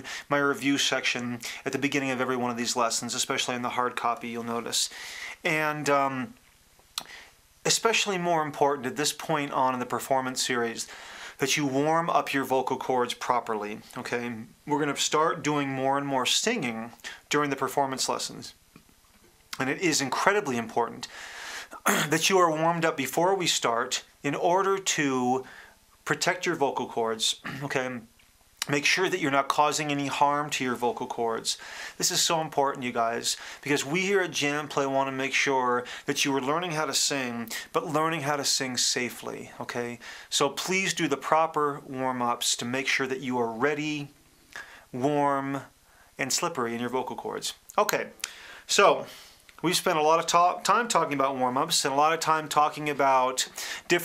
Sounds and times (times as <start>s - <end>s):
Speech: 0.0s - 6.4s, 7.6s - 18.6s, 19.5s - 21.1s, 21.8s - 44.2s, 44.9s - 54.0s.